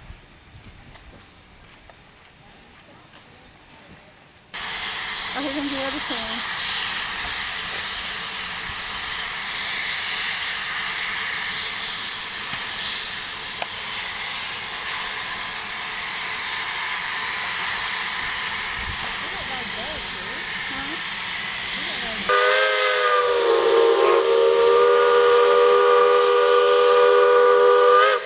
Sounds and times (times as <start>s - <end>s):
Speech: 5.4s - 6.4s, 19.1s - 21.0s.